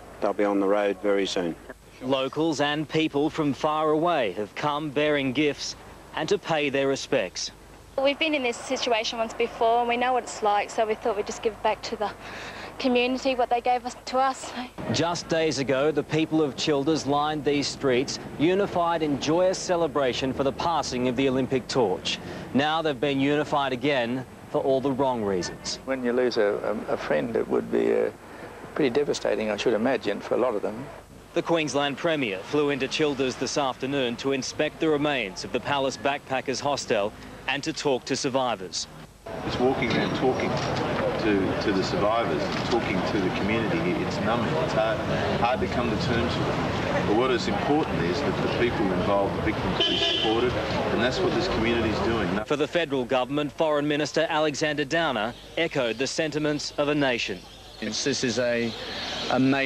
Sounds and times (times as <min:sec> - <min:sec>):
Speech: 0:12.8 - 0:28.2, 0:28.8 - 0:38.9.